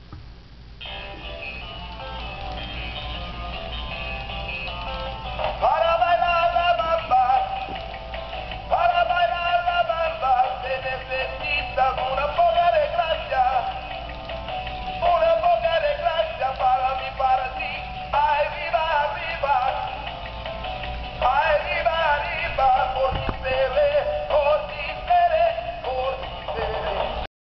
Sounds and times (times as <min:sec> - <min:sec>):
Music: 0:00.8 - 0:27.3
Synthetic singing: 0:05.6 - 0:07.8, 0:08.7 - 0:14.0, 0:15.0 - 0:20.1, 0:21.2 - 0:27.3.